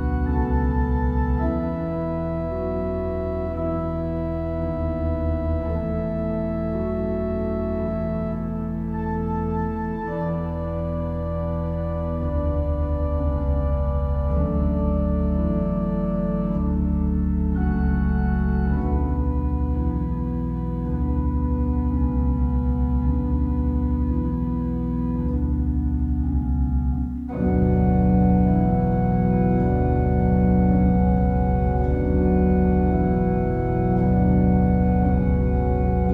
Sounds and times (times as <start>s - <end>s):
Inside, small room: 0.0s - 36.1s
Organ: 0.0s - 36.1s.